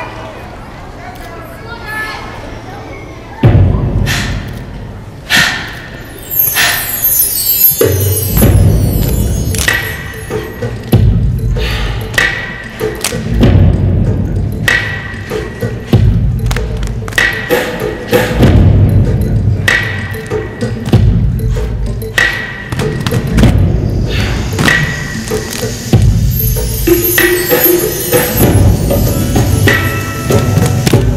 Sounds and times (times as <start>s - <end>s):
Music: 3.4s - 31.1s.